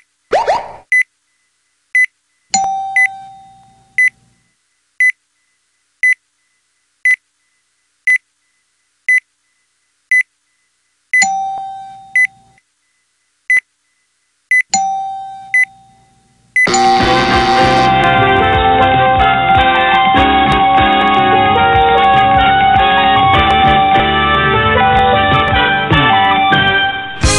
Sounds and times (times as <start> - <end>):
Doorbell: 16.7 - 17.9
Music: 16.7 - 27.3.